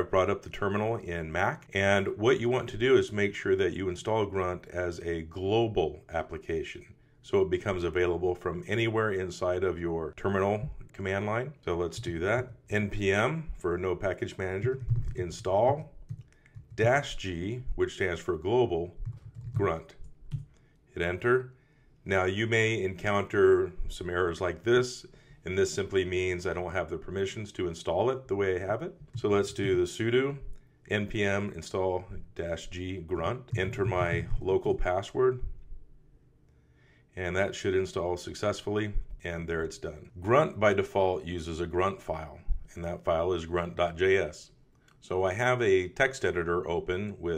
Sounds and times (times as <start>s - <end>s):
Speech: 0.0s - 16.0s, 16.8s - 20.0s, 21.0s - 35.5s, 37.2s - 47.3s.